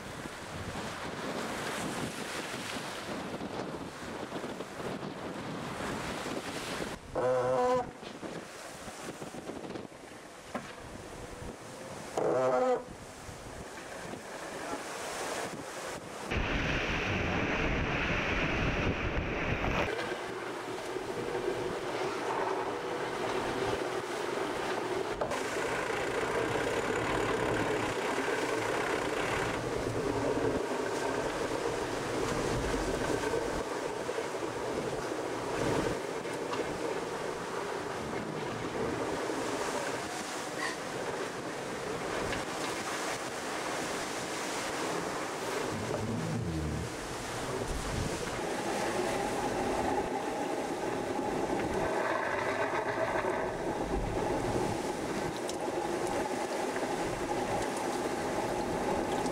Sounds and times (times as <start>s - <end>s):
Wind noise (microphone): 0.0s - 12.1s, 15.4s - 20.1s, 42.1s - 59.3s
Motorboat, speedboat: 0.0s - 59.3s
Waves, surf: 0.0s - 59.3s.